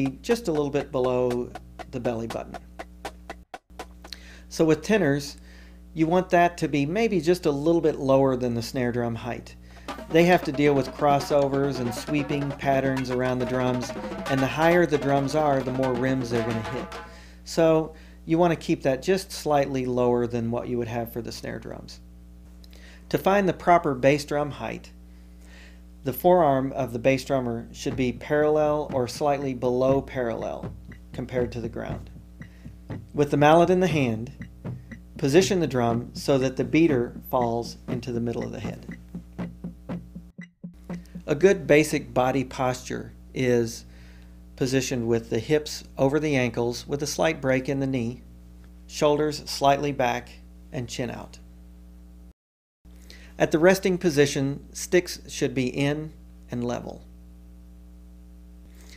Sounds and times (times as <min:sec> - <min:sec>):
Speech: 0:00.0 - 0:02.6, 0:04.5 - 0:05.4, 0:06.0 - 0:22.0, 0:23.1 - 0:25.0, 0:26.0 - 0:32.1, 0:33.1 - 0:34.4, 0:35.2 - 0:38.9, 0:41.2 - 0:43.9, 0:44.6 - 0:48.3, 0:48.9 - 0:51.4, 0:53.4 - 0:57.1
Wood block: 0:00.0 - 0:04.2, 0:09.8 - 0:17.3, 0:28.9 - 0:33.2, 0:34.2 - 0:41.4.